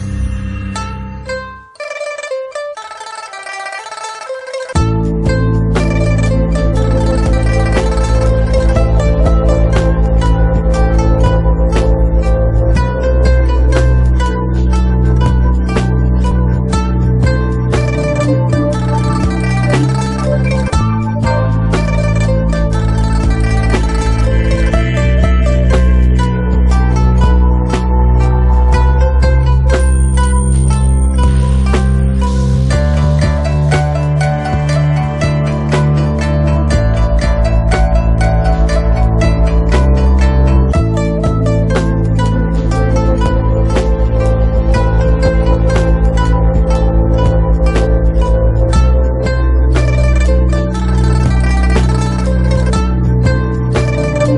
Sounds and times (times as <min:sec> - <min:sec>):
Music: 0:00.0 - 0:54.3.